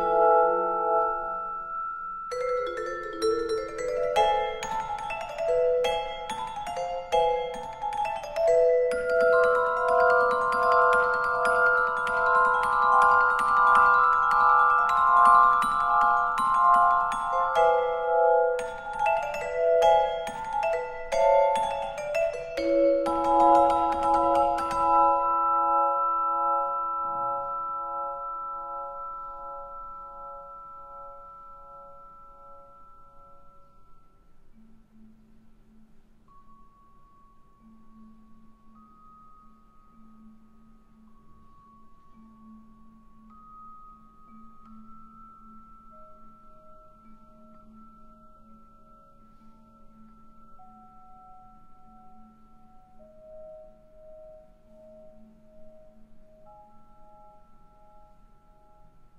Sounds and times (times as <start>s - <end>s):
Glockenspiel: 0.0s - 59.1s
Marimba, xylophone: 0.0s - 59.1s.